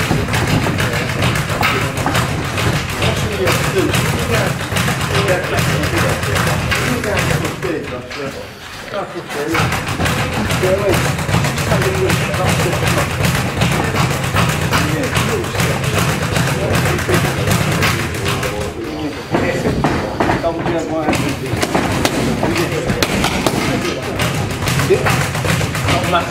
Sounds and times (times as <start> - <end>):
Speech: 0.0 - 26.3.